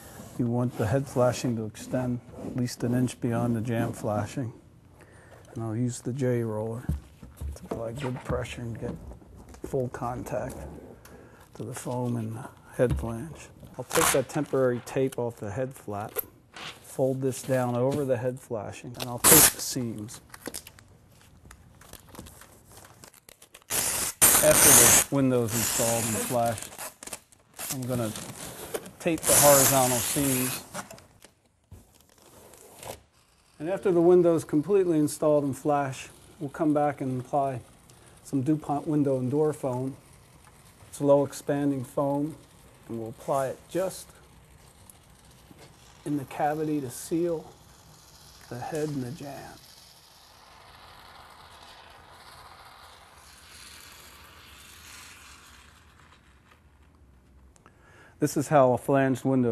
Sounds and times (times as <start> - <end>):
Speech: 0.4 - 4.6, 5.5 - 6.9, 7.7 - 9.0, 9.7 - 10.8, 11.6 - 16.2, 16.9 - 20.2, 24.4 - 26.7, 27.7 - 28.2, 29.0 - 30.6, 33.6 - 37.6, 38.2 - 40.0, 41.0 - 44.1, 46.0 - 47.5, 48.5 - 49.6, 58.2 - 59.5.